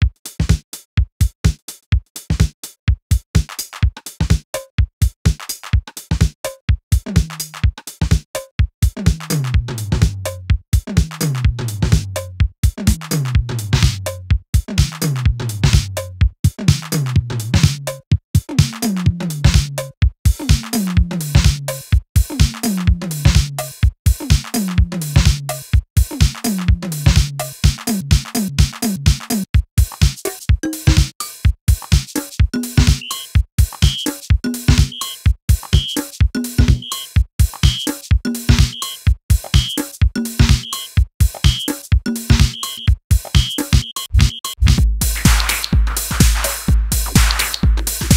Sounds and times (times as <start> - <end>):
Drum machine: 0.0 - 48.1.